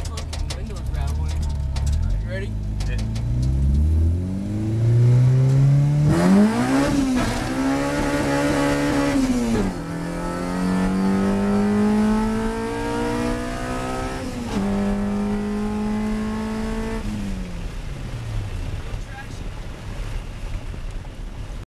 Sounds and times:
Speech: 0.0s - 3.0s, 19.0s - 19.5s
Car: 0.0s - 21.6s.

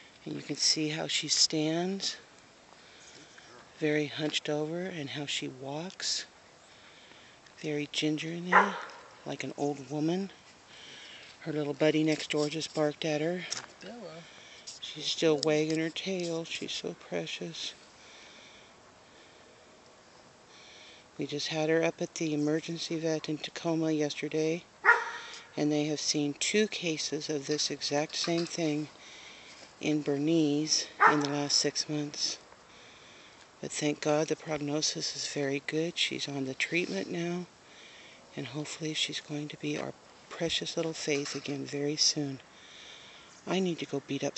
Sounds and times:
Speech: 0.2s - 2.2s, 3.5s - 6.3s, 7.6s - 10.4s, 11.4s - 17.8s, 21.2s - 24.6s, 25.6s - 28.9s, 29.8s - 32.4s, 33.6s - 37.5s, 38.4s - 42.4s, 43.5s - 44.3s
Bow-wow: 24.9s - 25.3s, 31.0s - 31.3s.

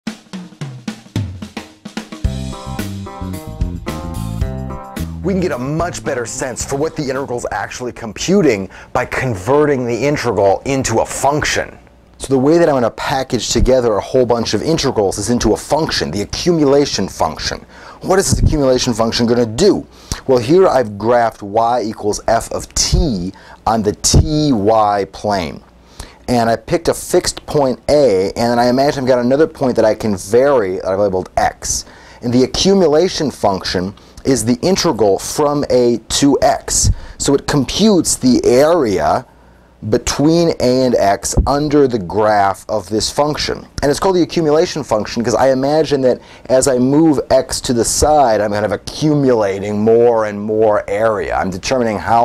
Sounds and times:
Snare drum: 0.1s - 3.2s
Hi-hat: 2.0s - 7.8s
Speech: 5.2s - 25.7s, 26.3s - 52.2s.

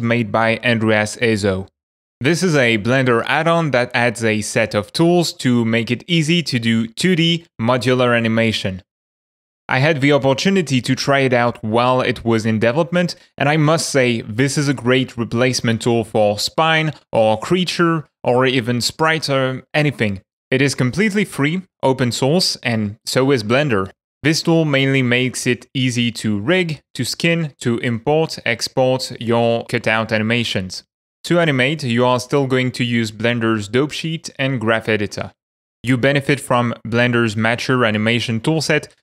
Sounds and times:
Speech: 0.0s - 8.9s, 9.7s - 39.0s.

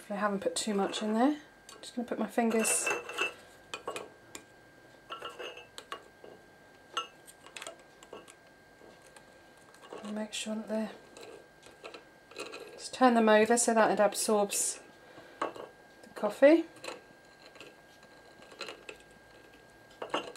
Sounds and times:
Speech: 0.0s - 3.0s, 10.0s - 11.0s, 12.8s - 14.9s, 16.2s - 16.7s
Inside, small room: 0.0s - 20.3s.

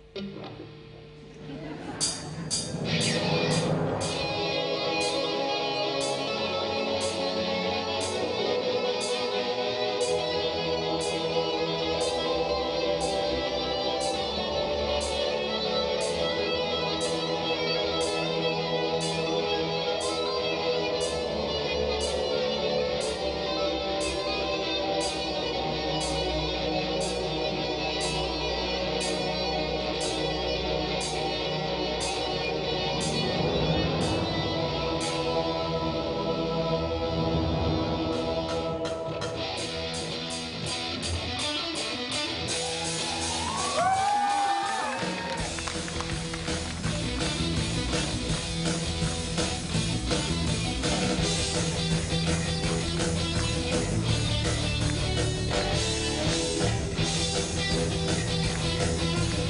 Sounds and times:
Music: 0.0s - 59.5s.

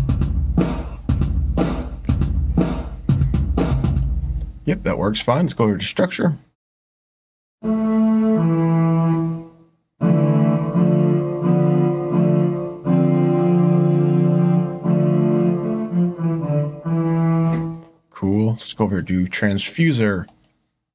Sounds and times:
Music: 0.0s - 4.6s, 7.6s - 18.0s
Speech: 4.6s - 6.5s, 18.1s - 20.4s.

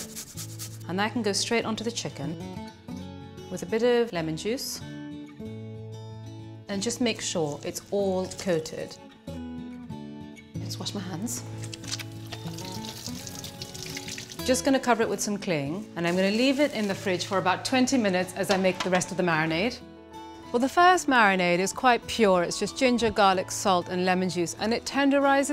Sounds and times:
Music: 0.0s - 25.5s
Speech: 0.9s - 2.4s, 3.6s - 4.8s, 6.7s - 9.0s, 10.7s - 11.4s, 14.5s - 19.8s, 20.6s - 25.5s.

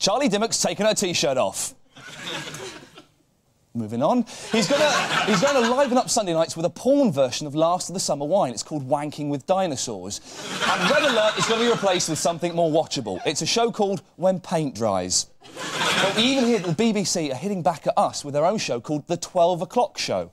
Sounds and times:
Speech: 0.0s - 1.8s, 3.8s - 15.3s, 16.0s - 20.3s.

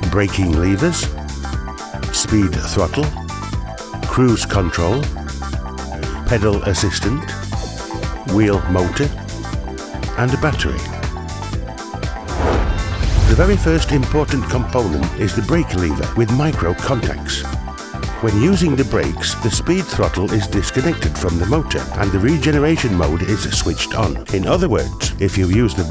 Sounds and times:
Speech: 0.0s - 1.1s, 2.1s - 3.2s, 4.0s - 5.1s, 6.2s - 7.4s, 8.3s - 9.2s, 10.2s - 11.0s, 13.3s - 17.5s, 18.2s - 25.9s
Music: 0.0s - 25.9s.

